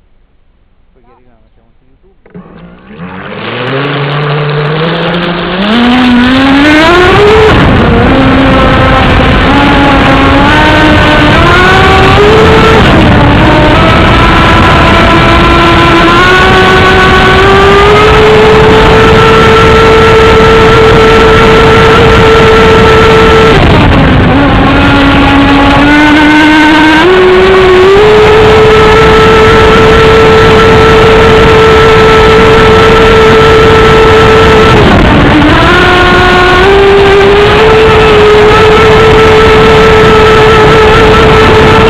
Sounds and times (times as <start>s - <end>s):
Motorboat, speedboat: 2.0s - 41.9s.